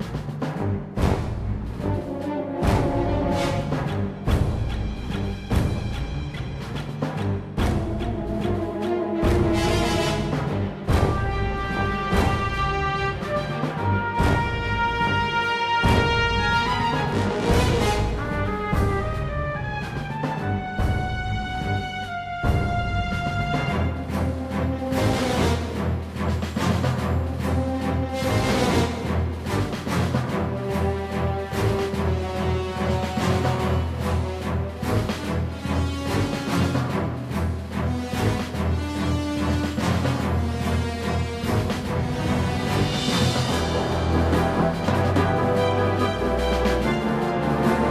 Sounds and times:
Music: 0.0s - 47.9s.

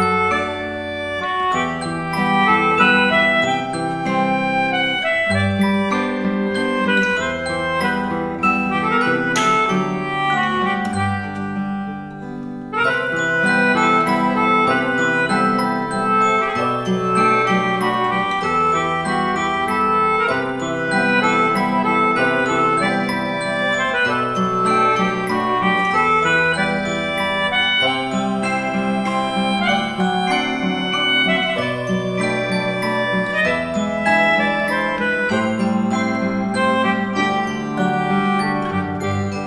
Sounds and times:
Acoustic guitar: 0.0s - 39.4s.

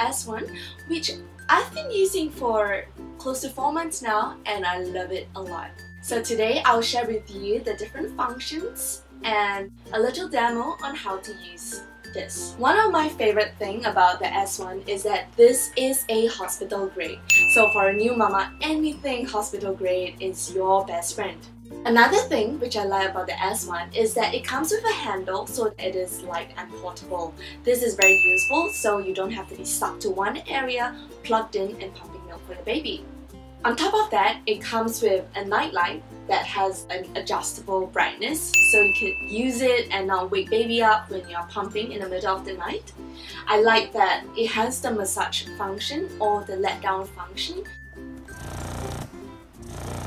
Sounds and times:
Speech: 0.0s - 33.0s, 33.6s - 47.7s
Music: 0.0s - 50.0s.

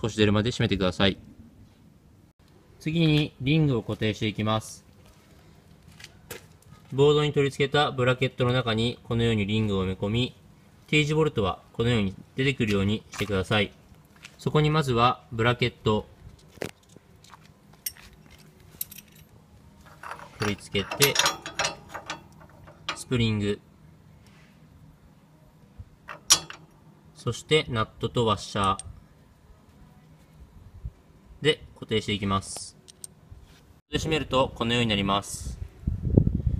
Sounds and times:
Speech: 0.0s - 1.2s, 2.8s - 4.9s, 6.8s - 13.8s, 14.4s - 16.1s, 20.4s - 21.3s, 23.0s - 23.6s, 27.2s - 28.9s, 31.4s - 32.8s, 33.9s - 35.6s.

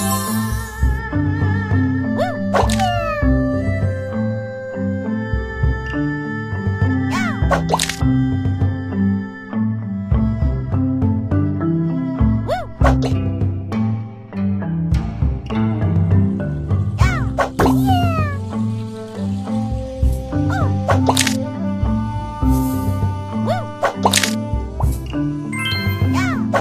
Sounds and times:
Music: 0.0s - 26.6s.

